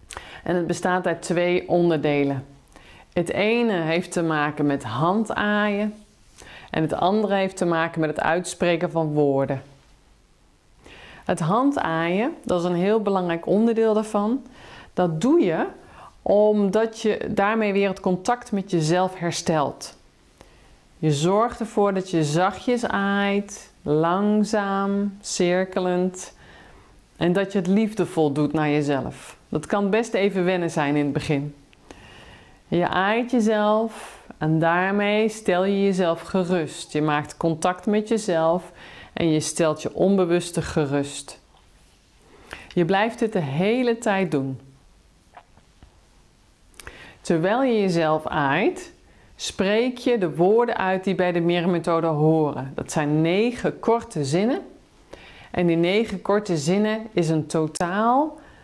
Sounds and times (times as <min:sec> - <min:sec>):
Speech: 0:00.4 - 0:02.6, 0:03.2 - 0:06.0, 0:06.7 - 0:09.8, 0:11.3 - 0:20.0, 0:21.0 - 0:26.4, 0:27.2 - 0:31.6, 0:32.7 - 0:41.5, 0:42.8 - 0:44.8, 0:47.2 - 0:54.8, 0:55.6 - 0:58.4.